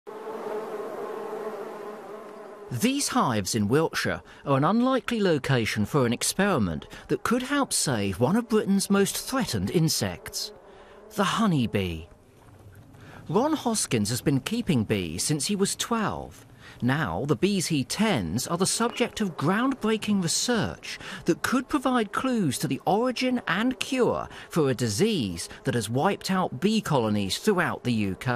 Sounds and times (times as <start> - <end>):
Fly, housefly: 0.1 - 3.0
Bee, wasp, etc.: 0.1 - 4.8, 5.9 - 28.3.